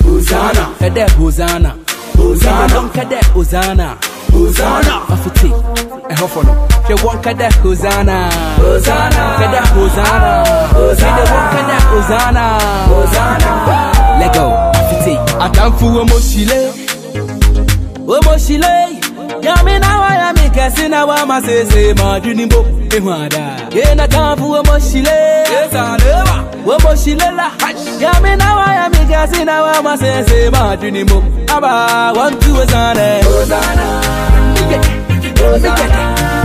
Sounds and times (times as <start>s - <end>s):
Singing: 0.0s - 5.6s, 7.9s - 16.8s, 23.8s - 36.4s
Reggae: 0.0s - 36.4s.